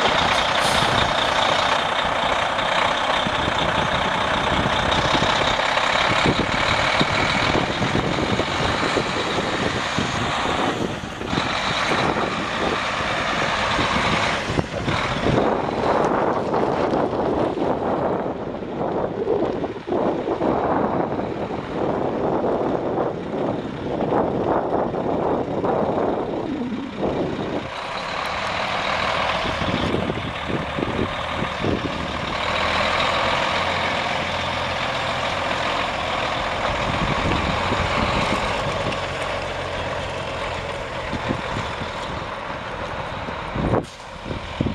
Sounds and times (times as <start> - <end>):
Outside, urban or manmade: 0.0 - 44.7
Truck: 0.0 - 44.7.